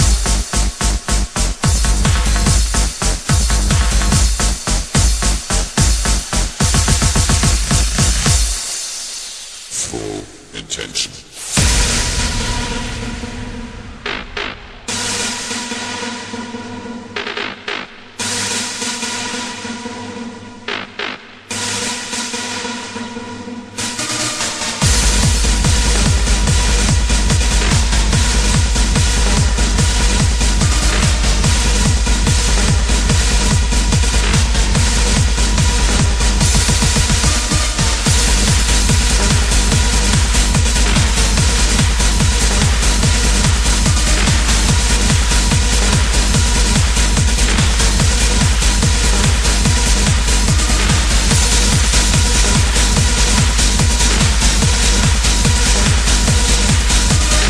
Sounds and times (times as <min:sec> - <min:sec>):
Techno: 0:00.0 - 0:57.4.